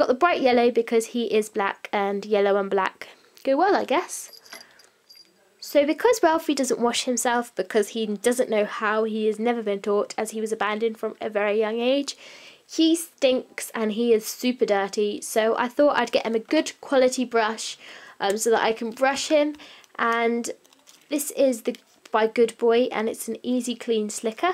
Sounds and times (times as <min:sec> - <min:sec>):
Speech: 0:00.0 - 0:04.3, 0:05.3 - 0:24.5
Inside, small room: 0:00.0 - 0:24.5.